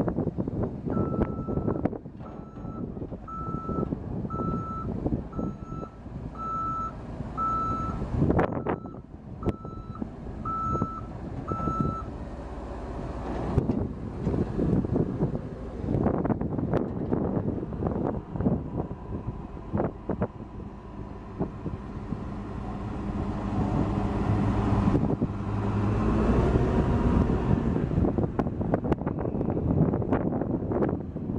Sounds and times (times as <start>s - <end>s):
Reversing beeps: 1.0s - 1.8s, 2.4s - 12.1s.